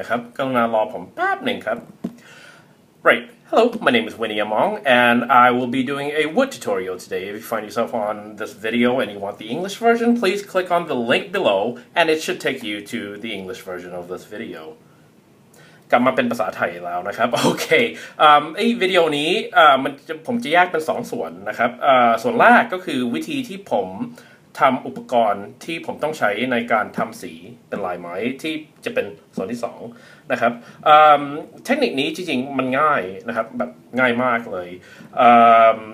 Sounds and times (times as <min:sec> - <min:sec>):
Speech: 0:00.0 - 0:01.9, 0:03.0 - 0:14.8, 0:15.9 - 0:35.9.